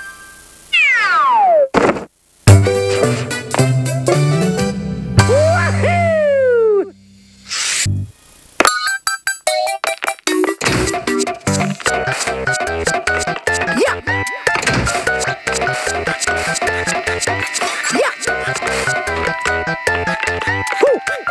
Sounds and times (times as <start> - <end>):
Music: 2.5 - 8.1, 9.3 - 21.3.